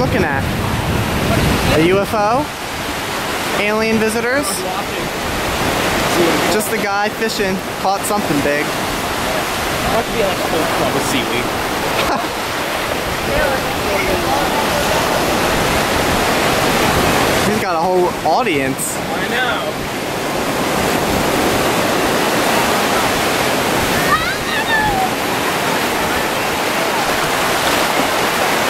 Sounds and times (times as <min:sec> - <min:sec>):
Wind noise (microphone): 0:00.0 - 0:06.5, 0:08.7 - 0:17.5, 0:19.4 - 0:28.6
Waves, surf: 0:00.0 - 0:28.6.